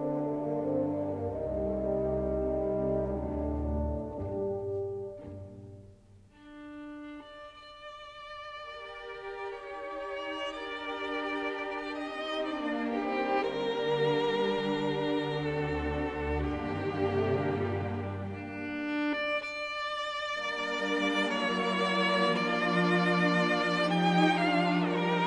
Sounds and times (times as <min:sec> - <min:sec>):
Orchestra: 0:00.0 - 0:25.2
Violin, fiddle: 0:06.4 - 0:25.2.